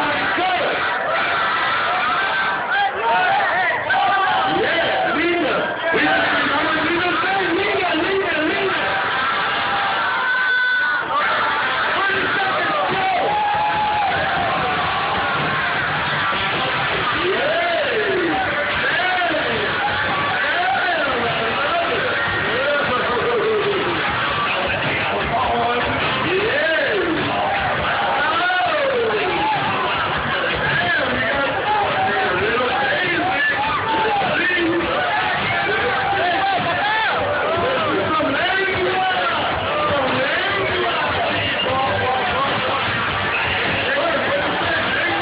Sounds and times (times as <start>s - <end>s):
Speech: 0.0s - 0.9s, 2.7s - 9.0s, 11.2s - 13.9s, 17.1s - 29.7s, 30.3s - 45.2s.